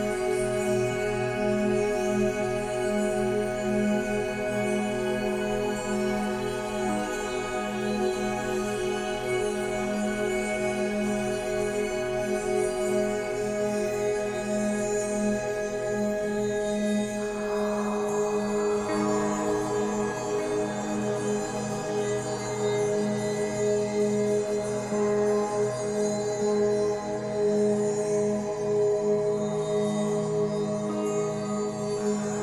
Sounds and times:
Music: 0:00.0 - 0:32.4.

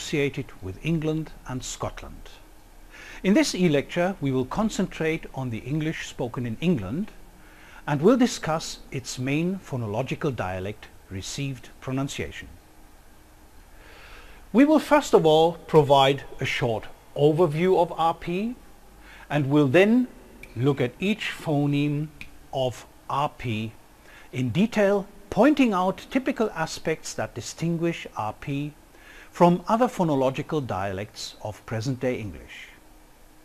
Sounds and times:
Speech: 0:00.0 - 0:02.4, 0:03.2 - 0:07.2, 0:07.8 - 0:12.6, 0:14.5 - 0:18.6, 0:19.3 - 0:32.8.

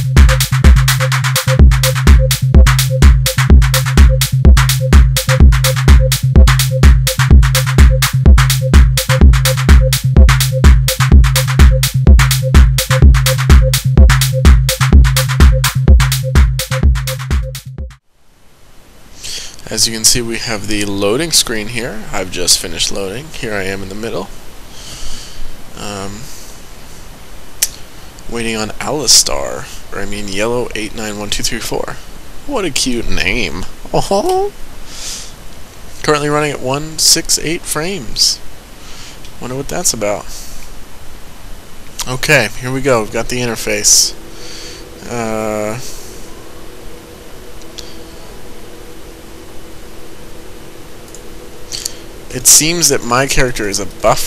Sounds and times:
Speech: 0:19.6 - 0:24.3, 0:25.8 - 0:26.3, 0:28.3 - 0:34.6, 0:36.0 - 0:38.4, 0:39.4 - 0:40.4, 0:42.0 - 0:44.2, 0:45.0 - 0:45.9, 0:52.3 - 0:54.2.

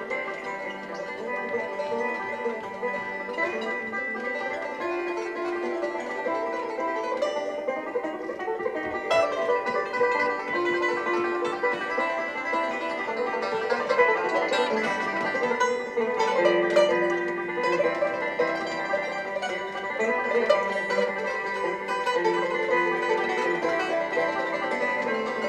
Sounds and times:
Banjo: 0:00.0 - 0:25.4
Bluegrass: 0:00.0 - 0:25.4
Bowed string instrument: 0:00.0 - 0:25.4.

